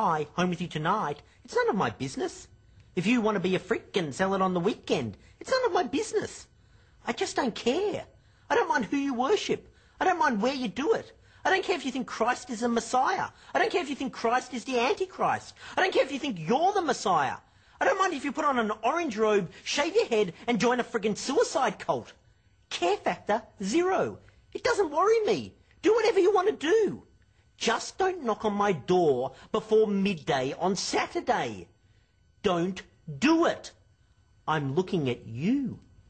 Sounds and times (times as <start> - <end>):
Speech: 0.0 - 31.7, 32.4 - 33.8, 34.4 - 35.9.